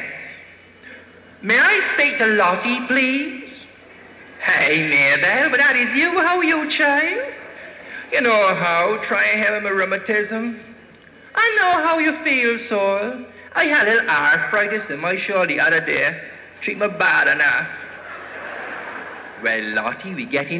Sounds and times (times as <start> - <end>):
Speech: 1.4 - 3.7, 4.4 - 7.4, 8.1 - 10.8, 11.4 - 17.9, 19.4 - 20.5.